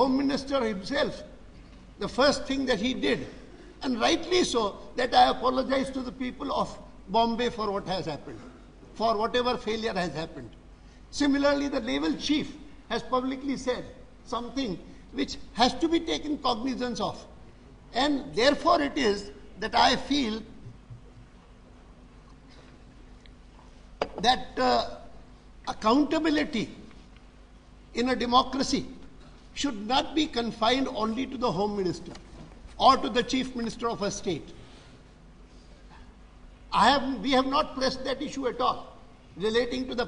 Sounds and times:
Male speech, man speaking: 0:00.0 - 0:01.3, 0:02.0 - 0:08.4, 0:09.0 - 0:10.5, 0:11.1 - 0:17.3, 0:17.9 - 0:20.5, 0:24.2 - 0:25.0, 0:25.7 - 0:26.8, 0:28.0 - 0:29.0, 0:29.6 - 0:32.2, 0:32.8 - 0:34.5, 0:36.7 - 0:40.0
Narration, monologue: 0:00.0 - 0:40.0.

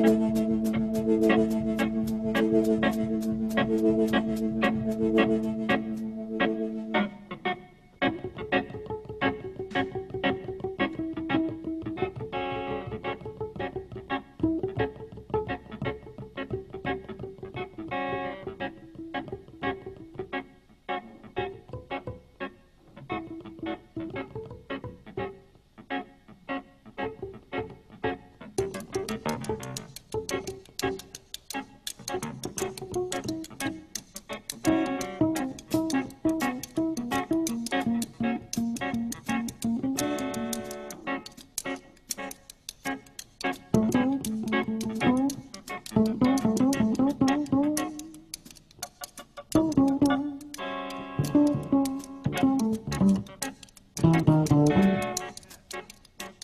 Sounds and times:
Music: 0:00.0 - 0:56.4.

